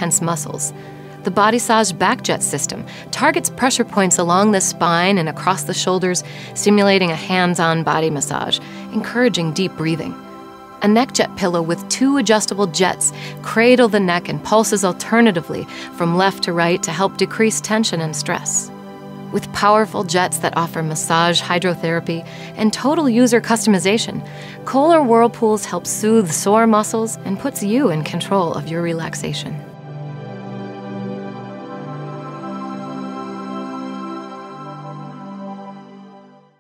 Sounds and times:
Speech: 0.0s - 0.7s, 1.3s - 10.2s, 10.8s - 18.7s, 19.4s - 29.7s
New-age music: 0.0s - 36.6s.

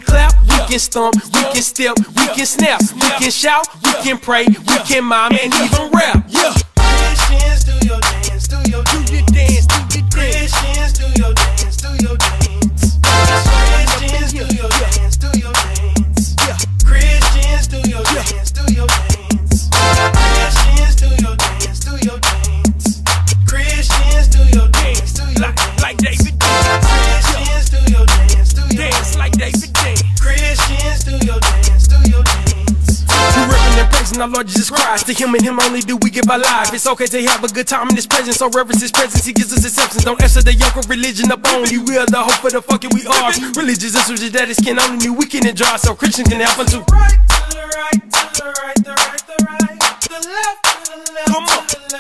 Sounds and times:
Music: 0.0s - 52.0s.

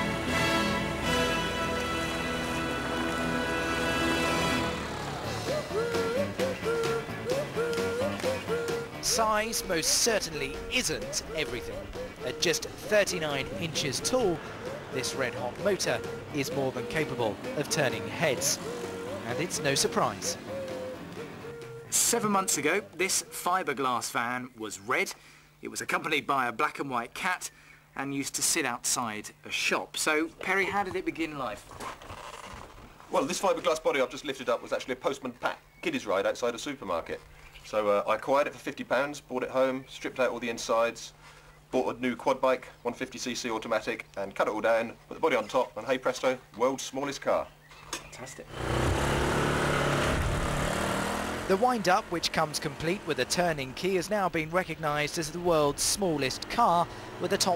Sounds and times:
Music: 0.0s - 22.7s
Motor vehicle (road): 0.0s - 23.3s, 47.3s - 57.5s
Speech: 9.0s - 14.4s, 15.0s - 18.6s, 19.2s - 20.4s, 21.9s - 31.6s, 33.1s - 47.5s, 48.1s - 48.5s, 51.5s - 57.5s.

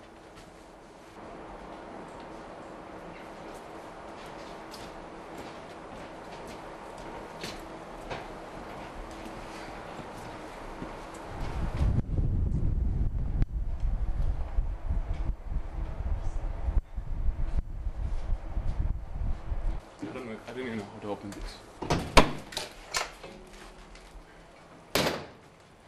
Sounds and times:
Speech: 20.0s - 21.7s.

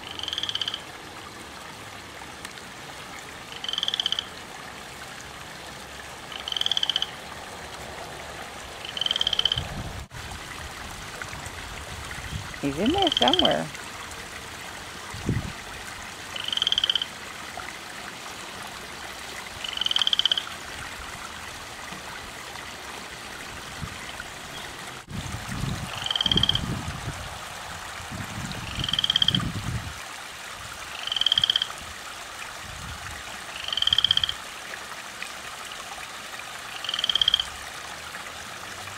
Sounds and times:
Frog: 0.0s - 0.9s, 3.5s - 4.4s, 6.3s - 7.2s, 8.8s - 9.7s, 12.8s - 13.7s, 16.3s - 17.1s, 19.6s - 20.6s, 25.9s - 26.7s, 28.6s - 29.5s, 30.9s - 31.8s, 33.5s - 34.5s, 36.7s - 37.6s.

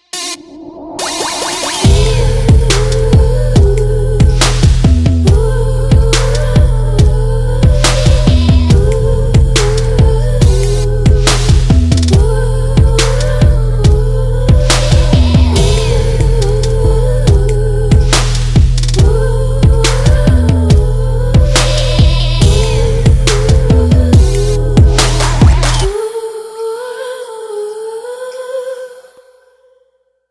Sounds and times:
Music: 0.0s - 28.2s.

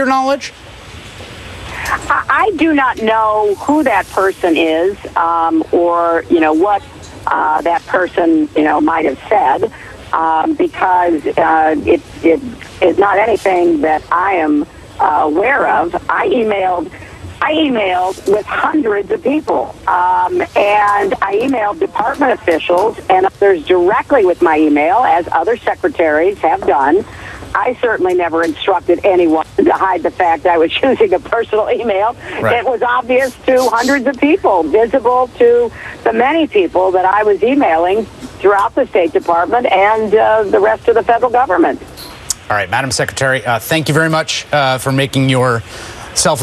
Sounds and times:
Speech: 1.8s - 46.4s.

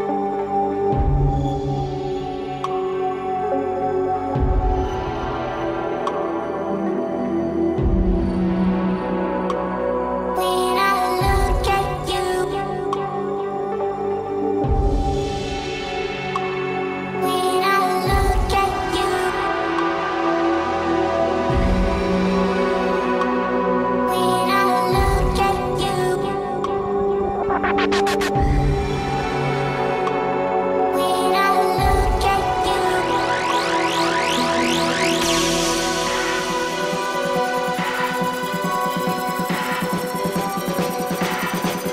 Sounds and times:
Electronic music: 0.0s - 41.9s.

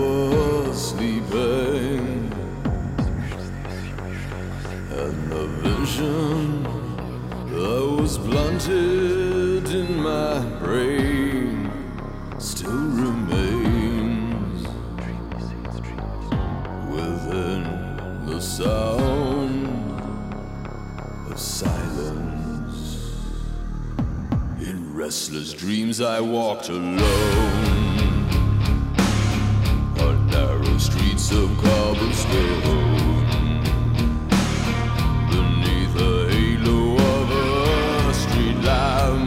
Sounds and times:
Music: 0.0s - 39.2s.

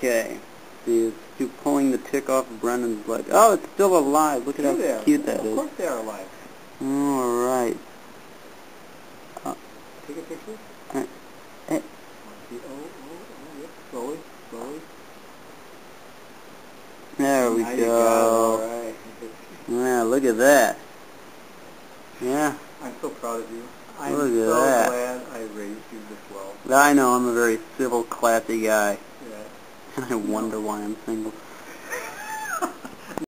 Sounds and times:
Speech: 0.0s - 7.8s, 9.4s - 11.1s, 11.7s - 14.9s, 17.2s - 20.8s, 22.2s - 31.4s.

